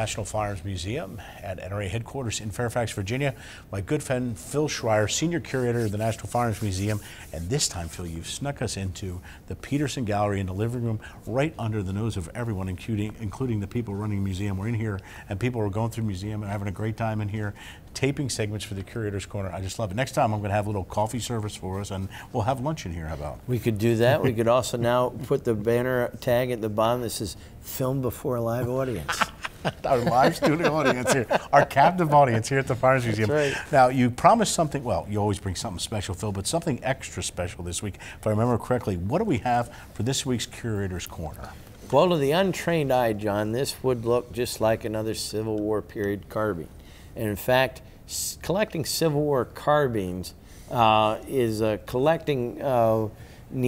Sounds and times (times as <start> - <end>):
Speech: 0.0 - 29.2, 29.8 - 53.6.